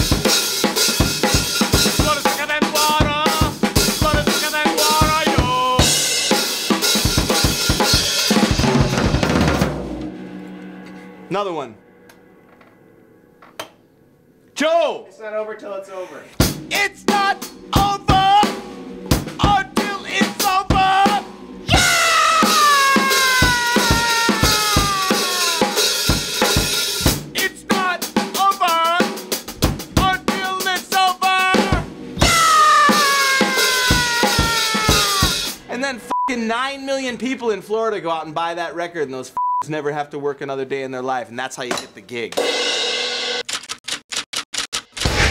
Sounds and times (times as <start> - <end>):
Drum kit: 0.0 - 13.2, 16.4 - 35.8, 41.6 - 43.5, 44.8 - 45.3
Bass drum: 1.0 - 6.1, 16.4 - 28.0, 29.4 - 30.7, 31.5 - 35.6.